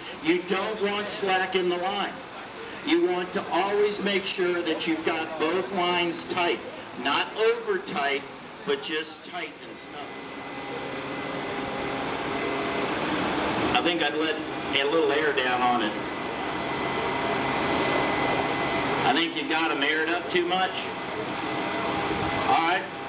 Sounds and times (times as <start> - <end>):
Air conditioning: 0.0 - 23.0
Vehicle: 0.0 - 23.0.